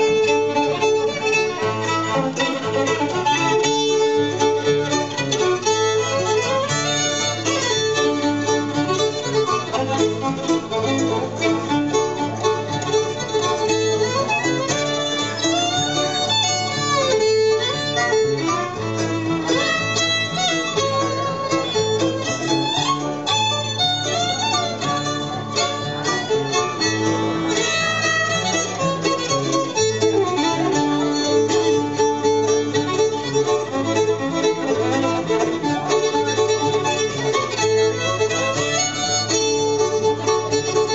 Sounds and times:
Violin, fiddle: 0:00.0 - 0:40.9.

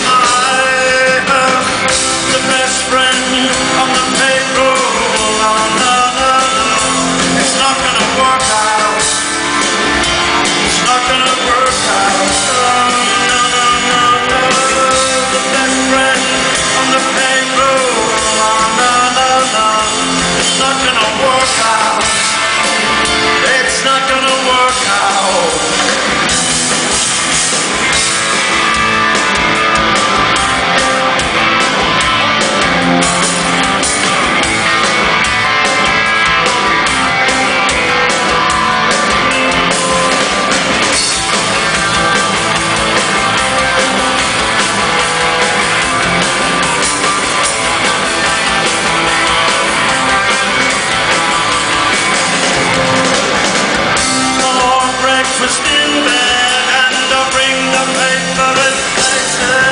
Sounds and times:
Pop music: 0:00.0 - 0:59.7.

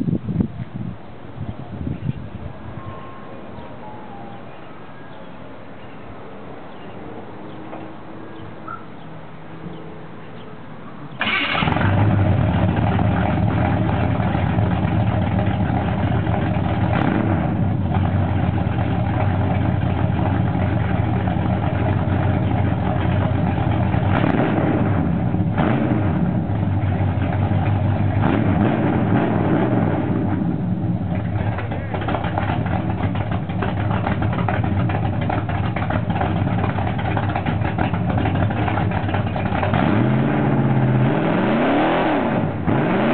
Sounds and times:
Vehicle: 0:00.0 - 0:43.1.

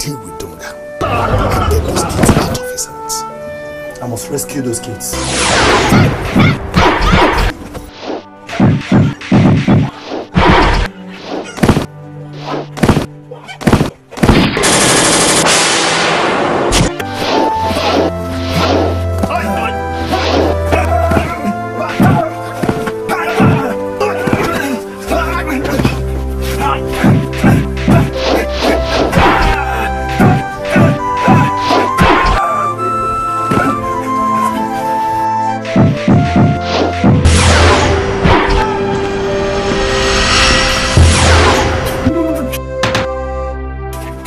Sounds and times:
Whack, thwack: 0:05.8 - 0:07.5, 0:08.5 - 0:11.9, 0:12.5 - 0:14.6, 0:27.0 - 0:29.6, 0:30.2 - 0:32.4, 0:35.7 - 0:38.6.

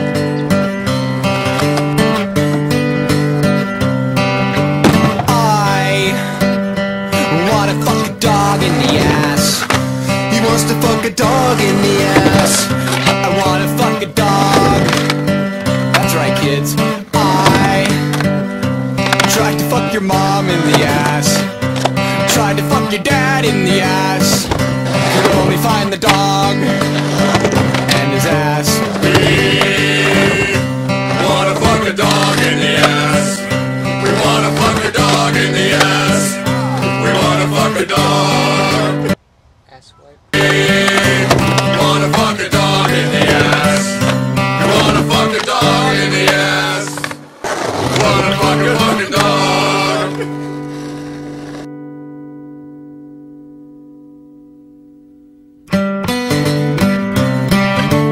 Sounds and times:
Music: 0:00.0 - 0:39.2, 0:40.4 - 0:58.1
Skateboard: 0:10.5 - 0:15.2, 0:19.0 - 0:19.7, 0:24.3 - 0:33.4, 0:34.0 - 0:37.5, 0:40.4 - 0:51.7.

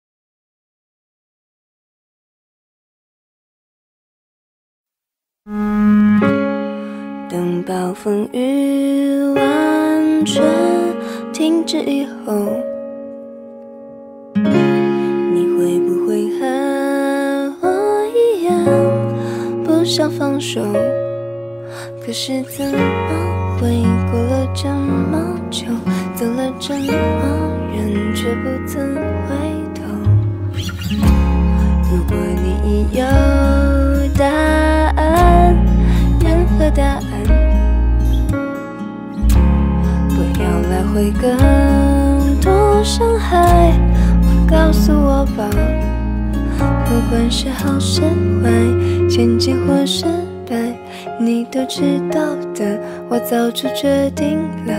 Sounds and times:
Background music: 0:05.5 - 0:54.7
New-age music: 0:05.5 - 0:54.7.

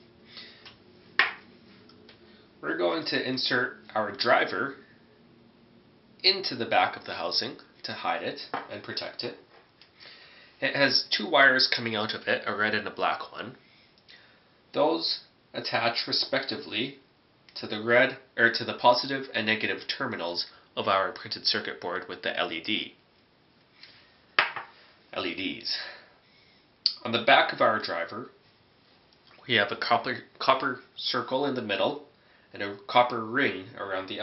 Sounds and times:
Speech: 0:02.6 - 0:04.8, 0:06.2 - 0:09.5, 0:10.6 - 0:13.6, 0:14.7 - 0:23.0, 0:25.1 - 0:26.1, 0:26.9 - 0:28.4, 0:29.4 - 0:34.2.

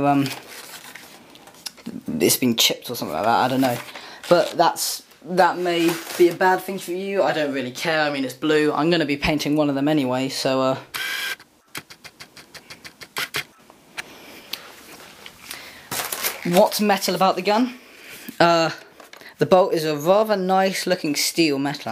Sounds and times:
Speech: 0:00.0 - 0:00.4, 0:01.7 - 0:10.9, 0:16.4 - 0:17.8, 0:18.4 - 0:21.9
Inside, small room: 0:00.0 - 0:21.9.

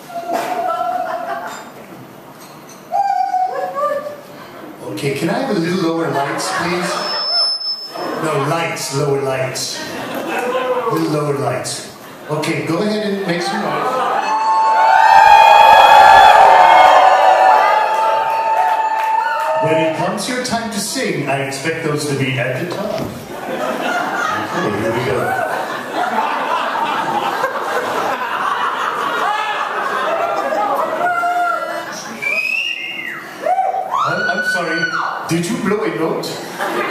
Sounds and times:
Speech: 0:10.8 - 0:14.1, 0:19.6 - 0:23.1, 0:34.1 - 0:36.4.

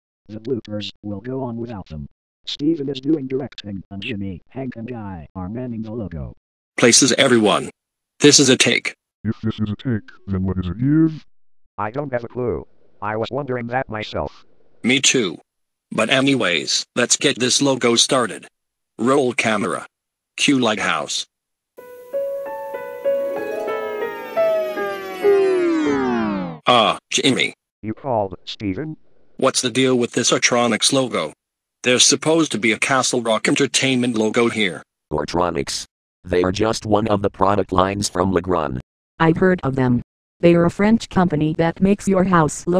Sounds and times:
Speech synthesizer: 0:00.3 - 0:21.3, 0:26.7 - 0:42.7.

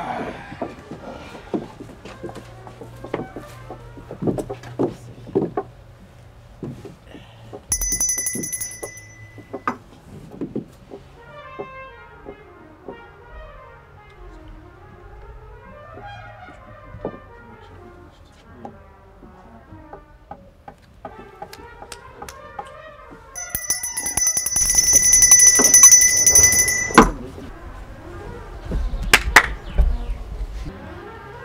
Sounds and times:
Trumpet: 0:11.2 - 0:18.1.

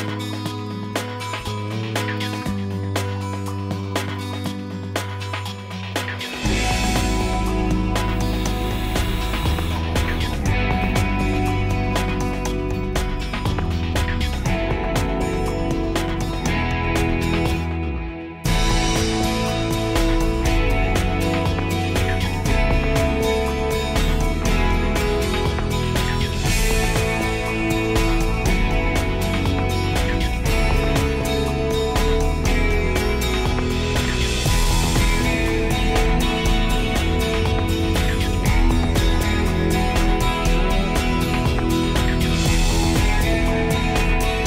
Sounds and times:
Music: 0:00.0 - 0:44.4.

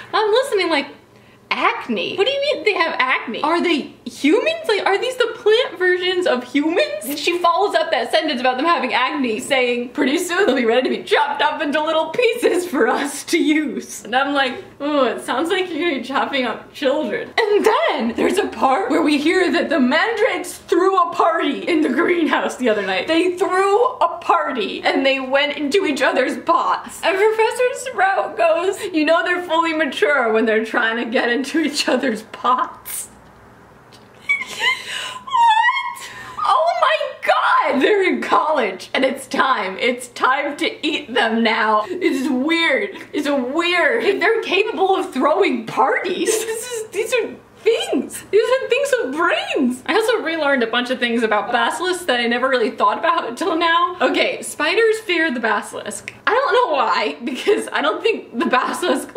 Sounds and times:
Speech: 0:00.0 - 0:33.2, 0:34.3 - 0:59.1
Shout: 0:35.3 - 0:37.8.

